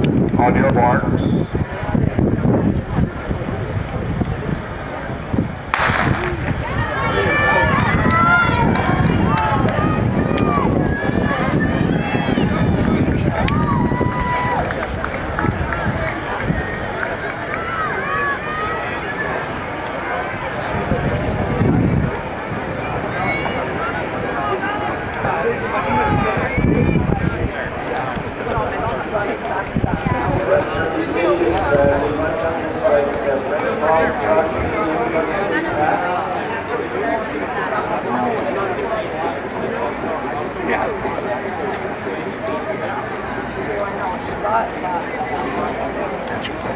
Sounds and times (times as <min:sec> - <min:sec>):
Speech: 0:00.0 - 0:02.0, 0:14.6 - 0:46.7
Outside, urban or manmade: 0:00.0 - 0:46.7
Run: 0:00.0 - 0:46.7.